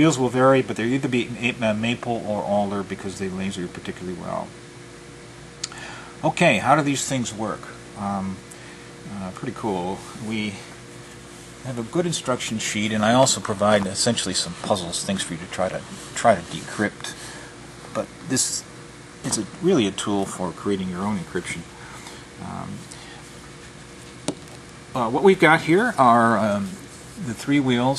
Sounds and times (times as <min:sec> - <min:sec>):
Speech: 0:00.0 - 0:04.6, 0:06.2 - 0:08.4, 0:09.1 - 0:10.8, 0:11.6 - 0:17.2, 0:17.9 - 0:21.7, 0:22.4 - 0:22.9, 0:25.0 - 0:27.9.